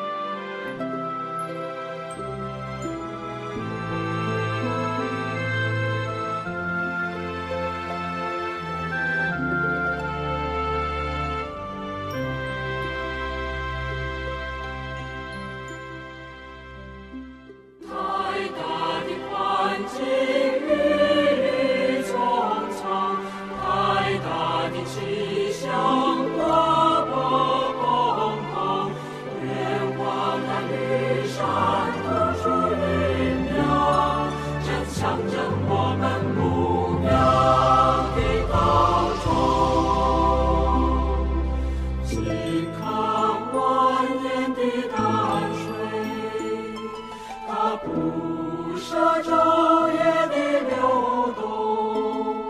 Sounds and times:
Background music: 0:00.0 - 0:52.5.

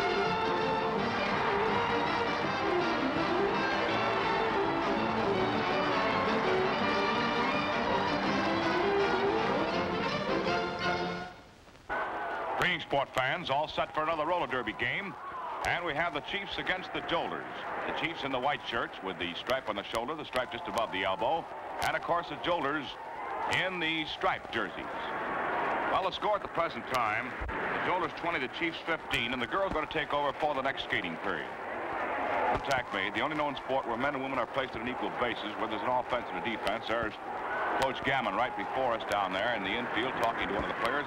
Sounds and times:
Music: 0:00.0 - 0:11.5
Speech: 0:12.6 - 0:25.1, 0:25.9 - 0:31.5, 0:32.6 - 0:37.2, 0:37.8 - 0:41.0.

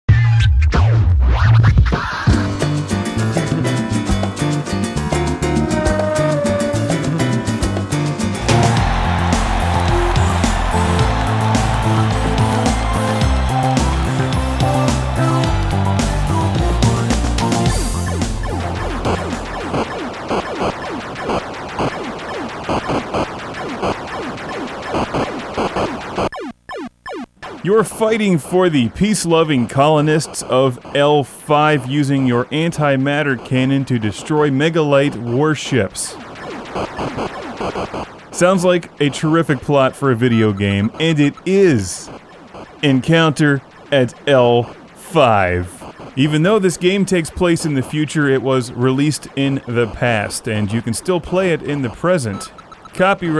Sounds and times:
Music: 0:00.1 - 0:23.0.

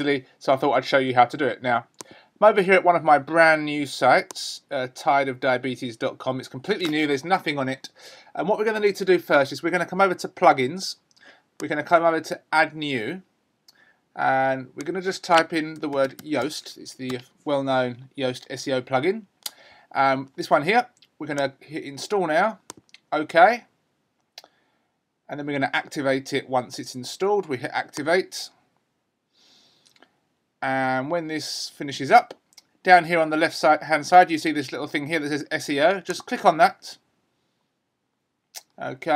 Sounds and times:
Speech: 0:00.0 - 0:11.0, 0:11.6 - 0:13.3, 0:14.2 - 0:19.3, 0:19.9 - 0:23.7, 0:25.3 - 0:28.6, 0:30.6 - 0:37.0, 0:38.6 - 0:39.1.

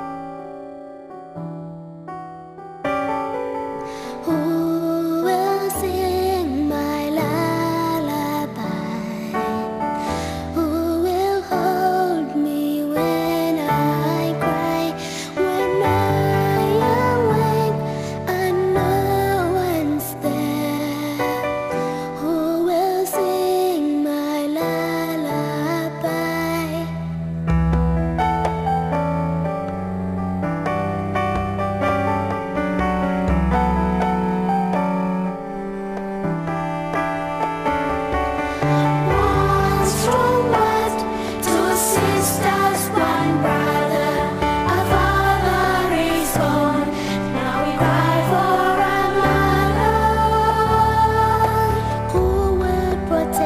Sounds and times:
Lullaby: 0:03.4 - 0:27.2, 0:36.9 - 0:53.4.

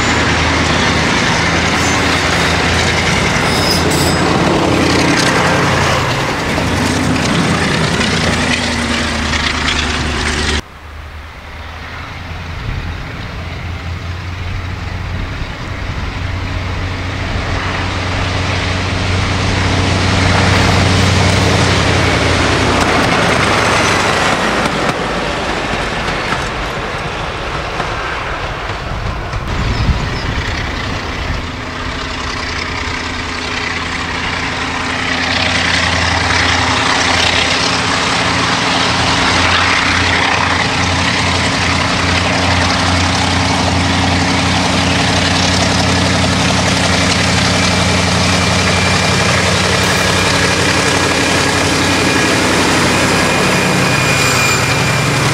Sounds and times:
Heavy engine (low frequency): 0:00.0 - 0:55.3
Vehicle: 0:00.0 - 0:55.3.

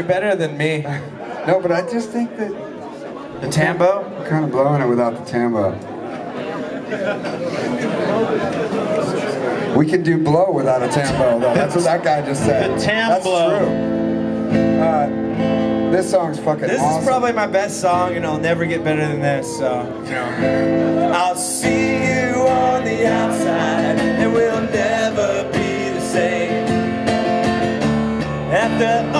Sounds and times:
Speech: 0:00.0 - 0:02.7, 0:03.4 - 0:05.8, 0:08.3 - 0:13.7, 0:14.8 - 0:15.1, 0:15.9 - 0:20.3
Music: 0:12.3 - 0:29.2.

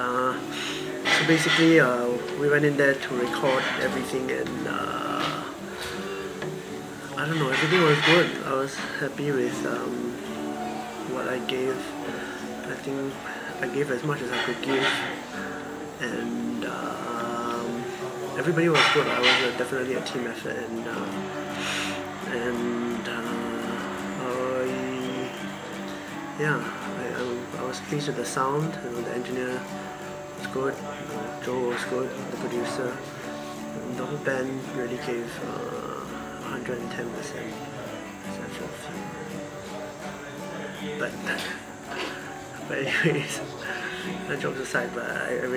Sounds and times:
Speech: 0:00.0 - 0:00.4, 0:01.0 - 0:05.6, 0:07.2 - 0:10.2, 0:11.0 - 0:12.0, 0:12.6 - 0:15.2, 0:16.0 - 0:21.2, 0:22.2 - 0:25.5, 0:26.4 - 0:29.7, 0:30.4 - 0:33.0, 0:33.8 - 0:39.4, 0:40.4 - 0:41.7, 0:42.6 - 0:45.5
Music: 0:00.0 - 0:45.5.

